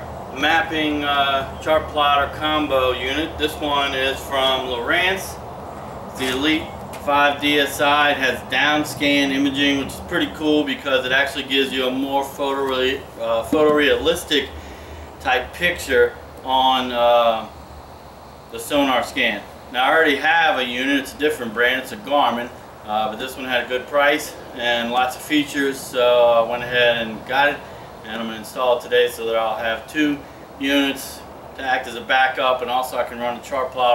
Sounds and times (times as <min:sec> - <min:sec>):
Speech: 0:00.4 - 0:05.4, 0:06.2 - 0:14.5, 0:15.2 - 0:17.5, 0:18.5 - 0:33.9.